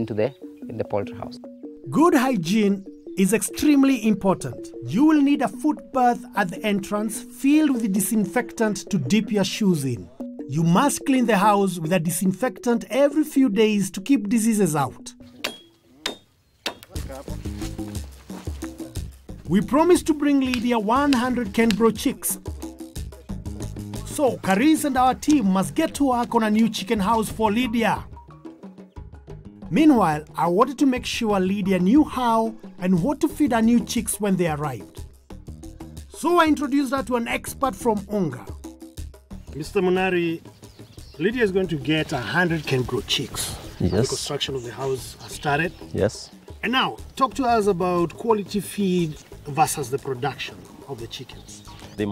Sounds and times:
Music: 0.0s - 52.1s
Narration, monologue: 0.0s - 52.1s.

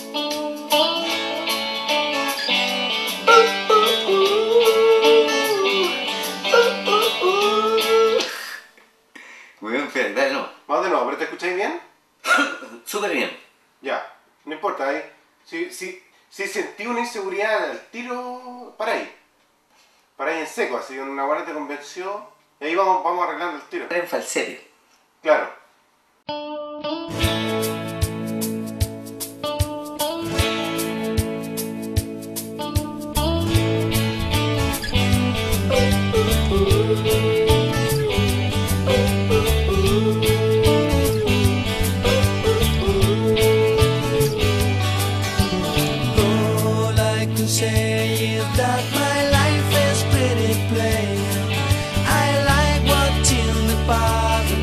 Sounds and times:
Music: 0.0s - 8.3s, 26.3s - 54.6s
Speech: 9.6s - 19.2s, 20.2s - 25.6s.

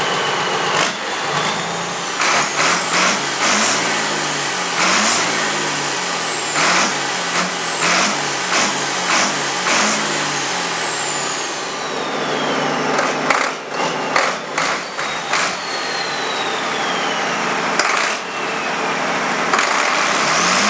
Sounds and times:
Engine: 0.0s - 20.6s
Truck: 0.0s - 20.6s.

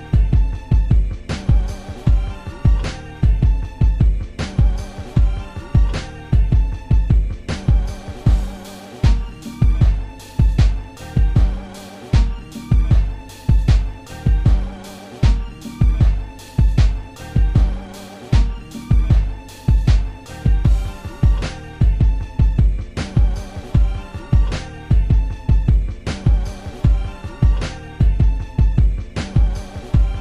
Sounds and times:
Music: 0.0s - 30.2s.

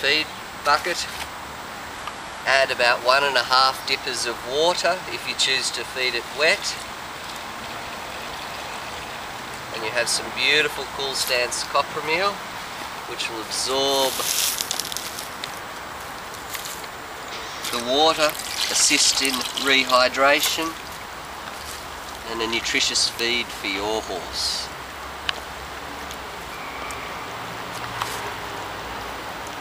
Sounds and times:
Speech: 0.0s - 1.2s, 2.5s - 6.8s, 9.7s - 12.4s, 13.1s - 14.4s, 17.7s - 20.8s, 22.2s - 24.7s.

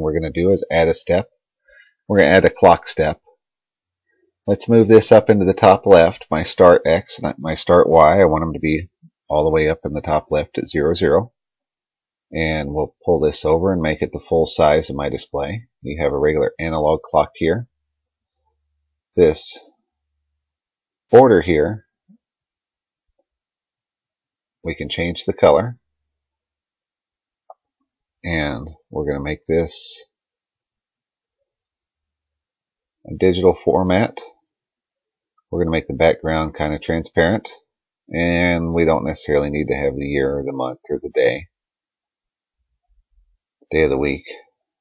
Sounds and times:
Speech: 0.0s - 1.3s, 2.1s - 3.3s, 4.5s - 11.4s, 12.3s - 17.7s, 19.2s - 19.8s, 21.1s - 21.9s, 24.6s - 25.8s, 28.2s - 30.2s, 33.1s - 34.4s, 35.5s - 41.6s, 43.6s - 44.6s.

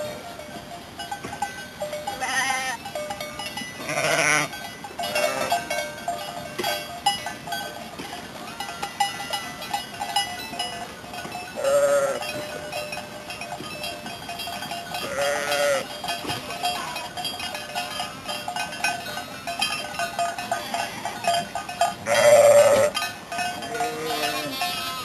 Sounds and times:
Sheep: 2.1s - 2.8s, 3.8s - 4.5s, 11.5s - 12.7s, 14.9s - 17.1s, 20.4s - 25.0s.

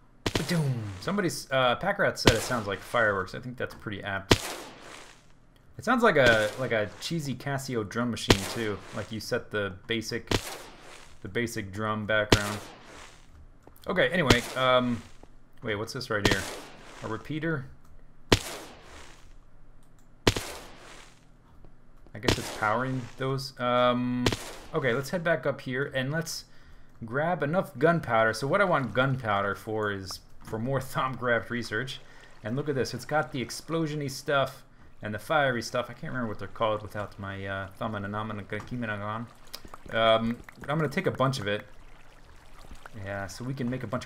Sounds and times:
Speech: 0.4s - 4.3s, 5.8s - 10.3s, 11.2s - 12.7s, 13.8s - 17.7s, 22.1s - 39.3s, 39.9s - 41.7s, 43.0s - 44.0s.

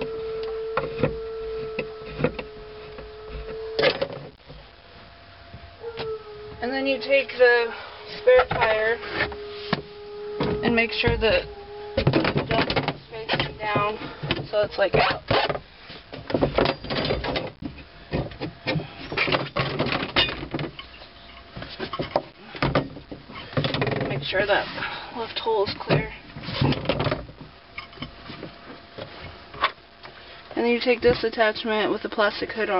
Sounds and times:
Speech: 6.6s - 9.0s, 10.6s - 11.5s, 12.5s - 15.2s, 24.1s - 26.2s, 30.6s - 32.7s.

